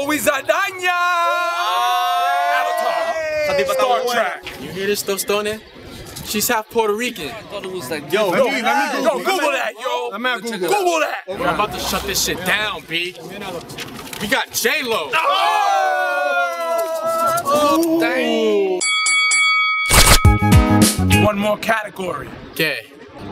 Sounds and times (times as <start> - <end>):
Outside, urban or manmade: 0.0 - 23.3.